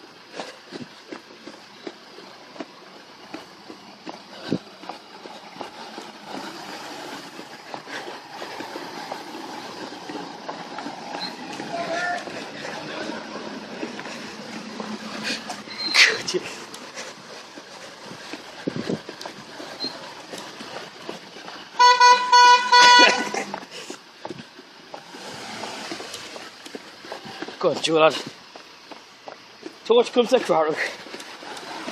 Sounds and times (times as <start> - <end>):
Outside, urban or manmade: 0.0 - 31.9.